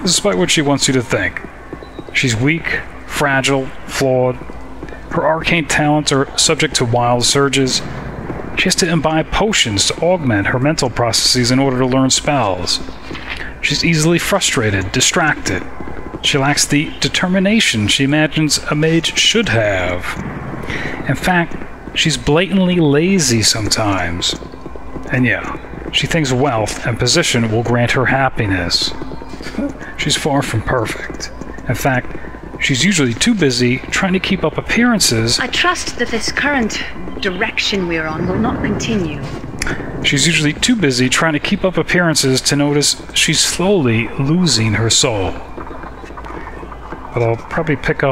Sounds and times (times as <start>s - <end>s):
Speech: 0.0s - 1.5s, 2.1s - 8.0s, 8.6s - 45.5s, 47.1s - 48.1s
Outside, urban or manmade: 0.0s - 48.1s.